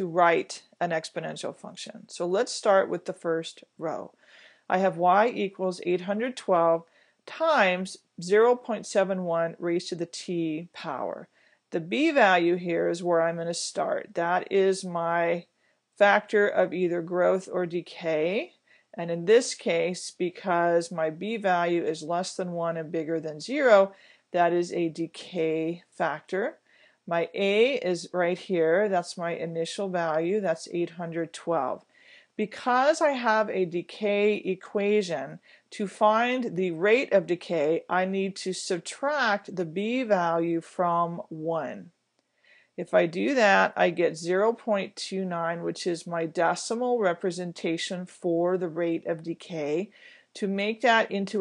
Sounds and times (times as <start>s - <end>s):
Speech: 0.0s - 42.0s, 42.8s - 51.4s.